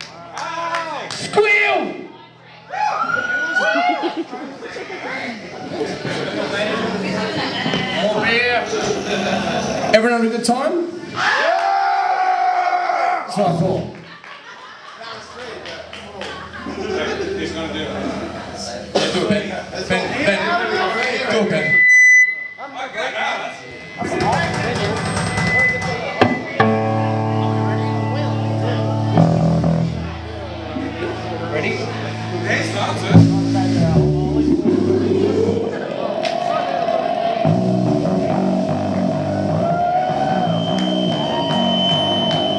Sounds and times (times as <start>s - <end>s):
Guitar: 0.0s - 10.0s, 15.2s - 22.6s, 23.6s - 42.5s.